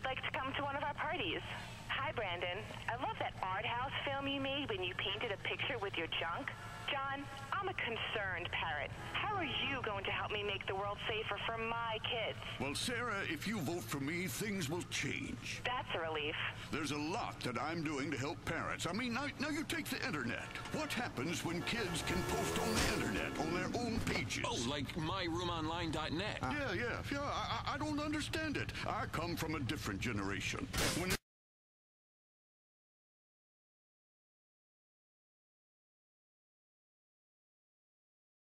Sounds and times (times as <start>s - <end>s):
Speech: 0.0s - 31.2s
Vehicle: 5.4s - 30.8s.